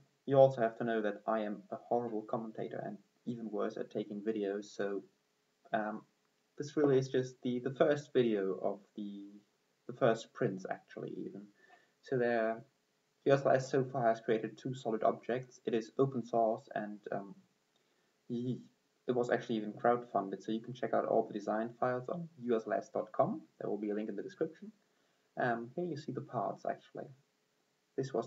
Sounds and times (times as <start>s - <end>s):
Speech: 0.3s - 5.1s, 5.7s - 12.7s, 13.3s - 17.4s, 18.3s - 24.8s, 25.4s - 27.2s, 28.0s - 28.2s.